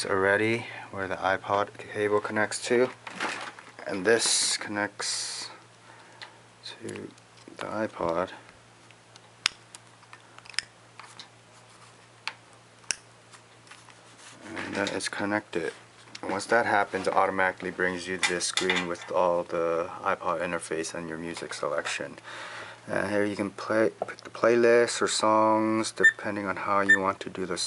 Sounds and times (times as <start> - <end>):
Speech: 0.0 - 3.0, 3.8 - 5.6, 6.6 - 8.4, 14.4 - 22.2, 22.9 - 27.6.